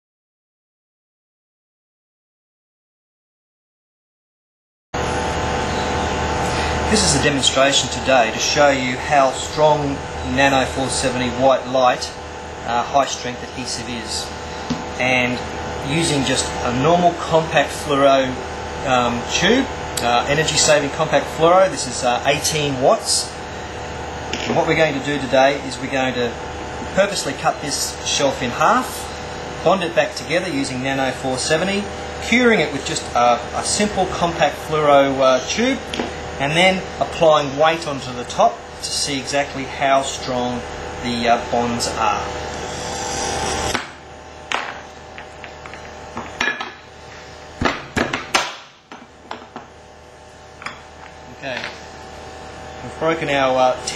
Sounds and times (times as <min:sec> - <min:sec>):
Speech: 0:06.9 - 0:14.4, 0:15.0 - 0:23.4, 0:24.4 - 0:42.4, 0:51.3 - 0:51.8, 0:52.8 - 0:53.9.